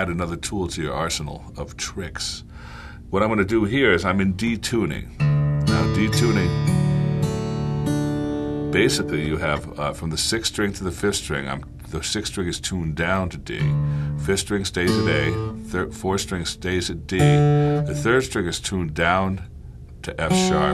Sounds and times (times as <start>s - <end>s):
Speech: 0.0s - 2.5s, 3.1s - 6.6s, 8.8s - 20.7s
Steel guitar, slide guitar: 5.3s - 9.4s, 14.9s - 15.7s, 17.2s - 18.1s, 20.3s - 20.7s.